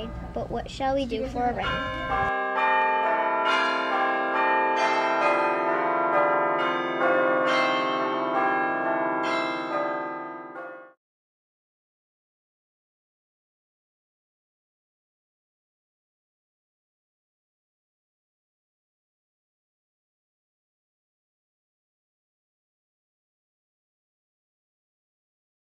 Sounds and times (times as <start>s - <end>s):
Change ringing (campanology): 1.6s - 11.0s.